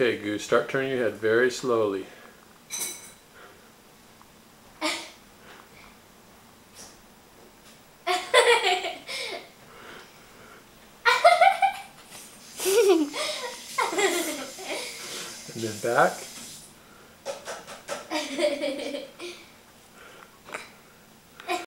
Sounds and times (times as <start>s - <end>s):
Speech: 0.0s - 2.2s, 15.5s - 16.2s.